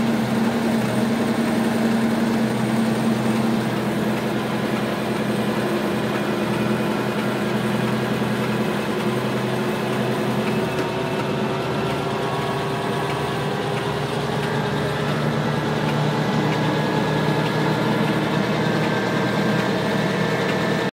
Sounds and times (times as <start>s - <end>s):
Heavy engine (low frequency): 0.0s - 20.9s
Vehicle: 0.0s - 20.9s.